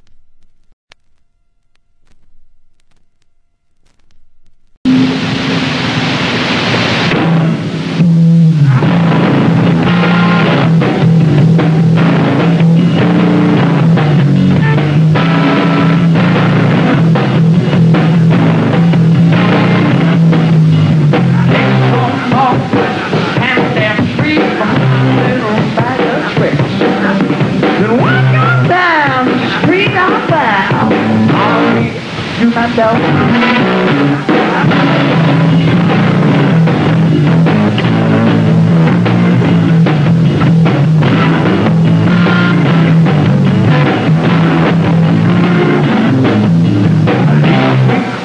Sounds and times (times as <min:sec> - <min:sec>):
Music: 0:04.9 - 0:48.2.